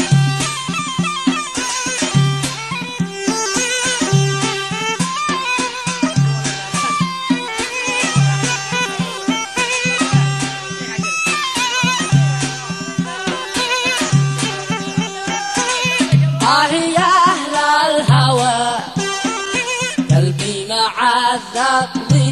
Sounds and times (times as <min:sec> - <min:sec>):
Folk music: 0:00.0 - 0:22.3
Middle Eastern music: 0:00.0 - 0:22.3
Traditional music: 0:00.0 - 0:22.3
Speech: 0:15.6 - 0:17.4.